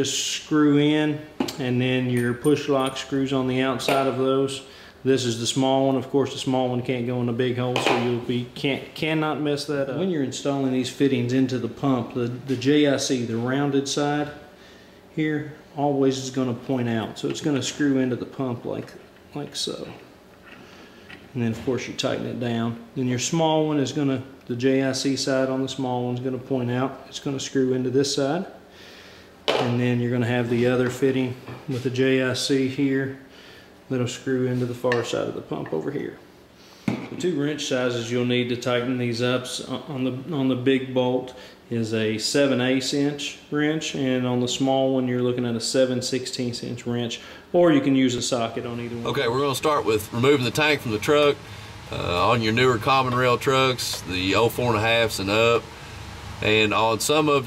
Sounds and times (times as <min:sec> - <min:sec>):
Speech: 0:00.0 - 0:14.5, 0:15.1 - 0:20.1, 0:21.3 - 0:28.6, 0:29.5 - 0:33.3, 0:33.9 - 0:36.3, 0:37.1 - 0:55.7, 0:56.4 - 0:57.4
Inside, small room: 0:00.0 - 0:57.4.